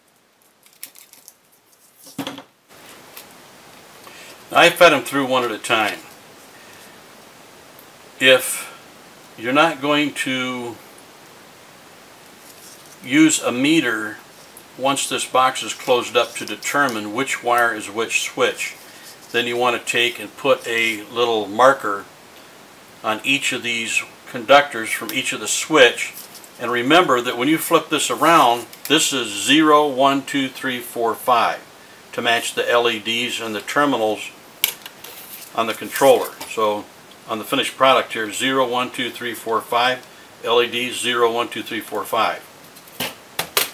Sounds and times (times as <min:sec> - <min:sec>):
Inside, small room: 0:00.0 - 0:43.7
Speech: 0:04.5 - 0:06.1, 0:08.2 - 0:08.8, 0:09.4 - 0:10.8, 0:13.0 - 0:14.2, 0:14.8 - 0:22.1, 0:23.0 - 0:34.4, 0:35.6 - 0:42.5.